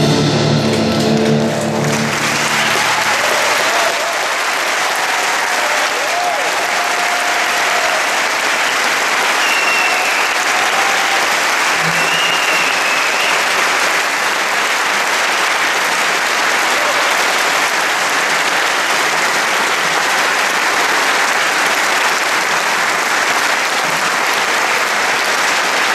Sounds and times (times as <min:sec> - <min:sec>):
Applause: 0:00.8 - 0:25.9.